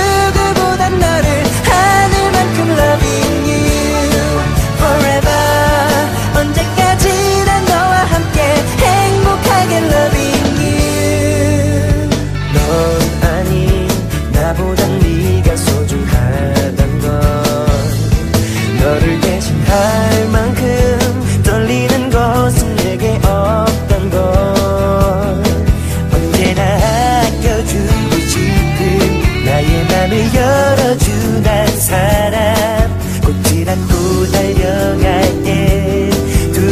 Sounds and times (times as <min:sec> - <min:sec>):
Dance music: 0:00.0 - 0:36.7.